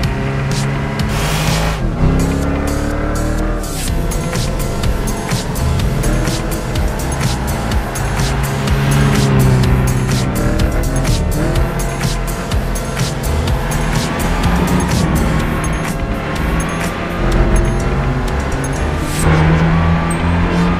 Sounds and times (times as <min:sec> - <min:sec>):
Music: 0:00.0 - 0:20.7.